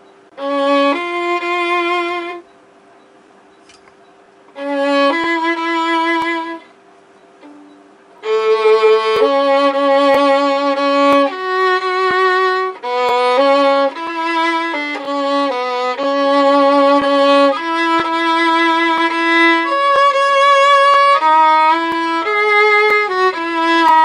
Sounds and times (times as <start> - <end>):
Violin, fiddle: 0.3 - 2.5, 4.5 - 6.7, 7.4 - 24.0.